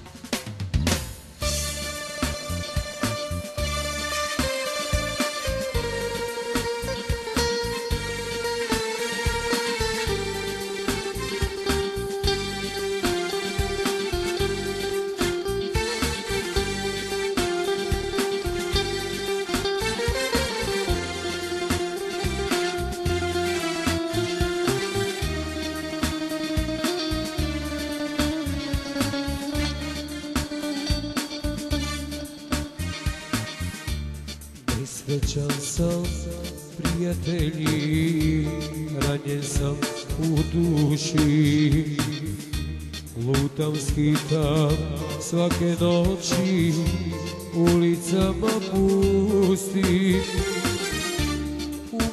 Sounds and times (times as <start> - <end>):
Music: 0.0 - 52.1.